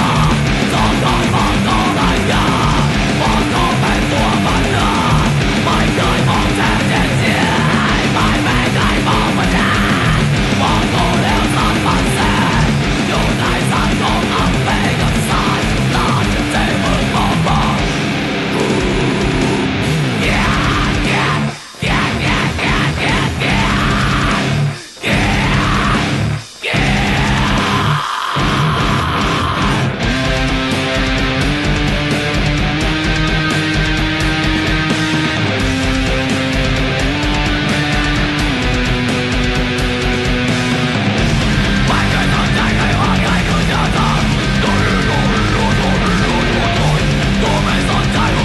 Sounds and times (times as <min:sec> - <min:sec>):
Electric guitar: 0:00.0 - 0:48.4.